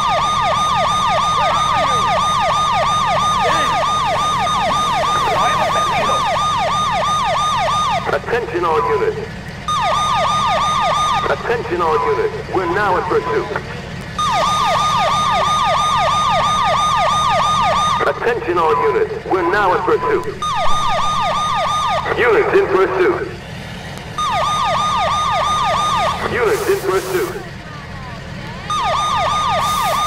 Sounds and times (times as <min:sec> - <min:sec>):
Ambulance (siren): 0:00.0 - 0:13.6, 0:14.2 - 0:23.3, 0:24.1 - 0:27.7, 0:28.4 - 0:30.0.